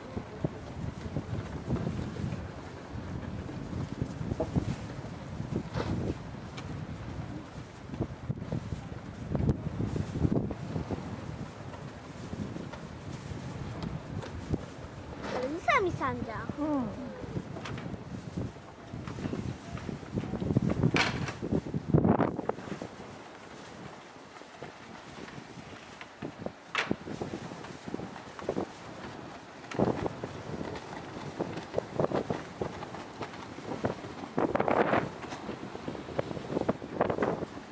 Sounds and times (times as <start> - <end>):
Wind noise (microphone): 0.0 - 37.7.